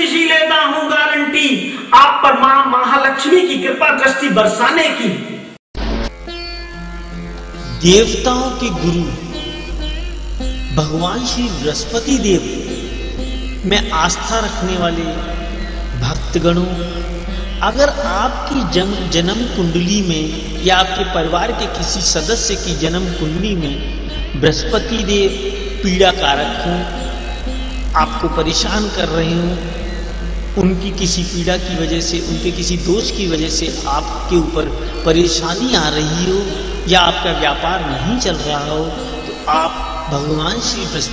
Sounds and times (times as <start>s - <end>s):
Speech: 0.0s - 5.4s, 7.7s - 9.2s, 10.8s - 12.6s, 13.7s - 15.3s, 16.0s - 16.9s, 17.6s - 23.8s, 24.4s - 27.0s, 28.0s - 29.7s, 30.6s - 41.1s
Music: 5.8s - 41.1s.